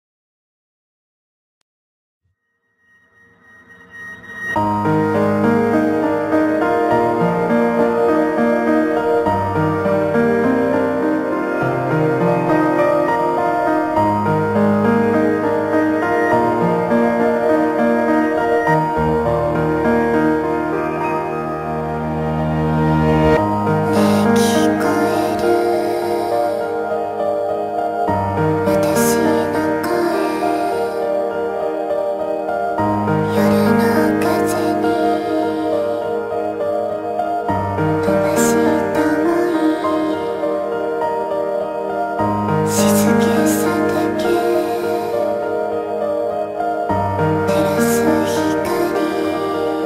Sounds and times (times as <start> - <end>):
Background music: 4.0 - 49.8.